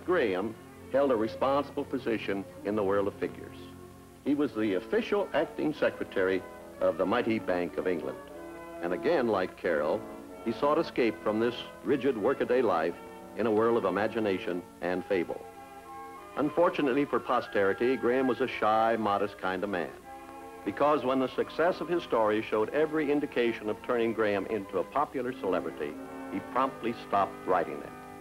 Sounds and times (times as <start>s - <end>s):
Speech: 0.0s - 3.7s, 4.3s - 8.2s, 8.8s - 15.4s, 16.4s - 20.0s, 20.7s - 27.9s
Music: 0.0s - 28.2s.